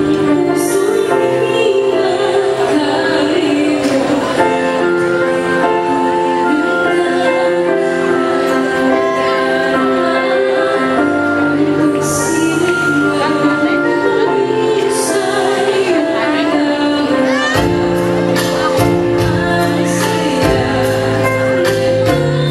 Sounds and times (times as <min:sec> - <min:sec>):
Female singing: 0:00.0 - 0:22.5
Music: 0:00.0 - 0:22.5.